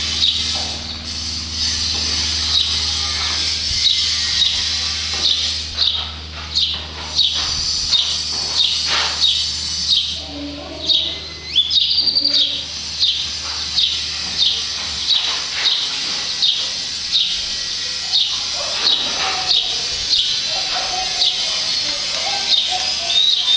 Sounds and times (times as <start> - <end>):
Speech: 10.2 - 11.4, 12.0 - 12.7, 17.8 - 23.5.